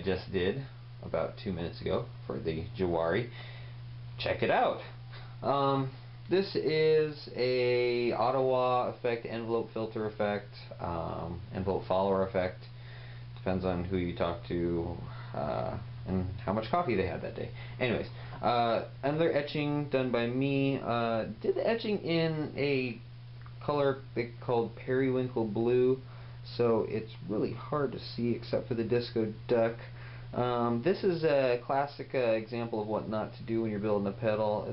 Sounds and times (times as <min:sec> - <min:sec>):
Speech: 0:00.0 - 0:03.4, 0:04.2 - 0:12.7, 0:13.4 - 0:34.7.